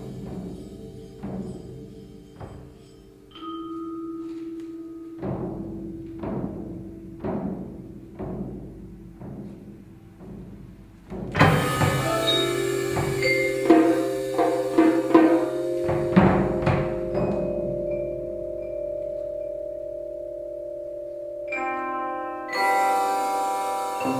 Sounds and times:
Timpani: 0.0s - 24.1s
Guitar: 11.4s - 24.1s.

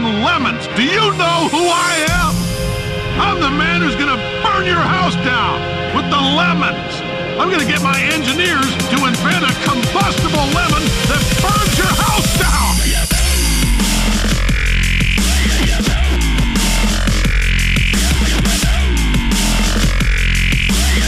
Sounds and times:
Speech: 0.0s - 2.4s, 3.2s - 13.0s
Music: 0.0s - 21.0s.

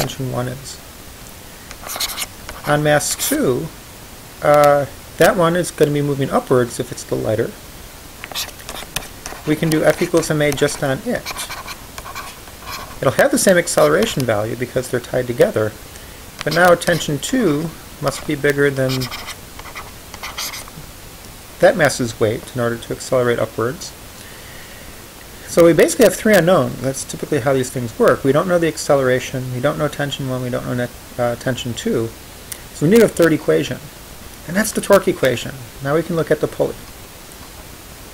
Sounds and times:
Speech: 0.0s - 0.8s, 2.6s - 3.8s, 4.4s - 7.6s, 9.5s - 11.5s, 13.0s - 15.8s, 16.4s - 19.2s, 21.6s - 24.0s, 25.5s - 32.2s, 32.8s - 36.9s.

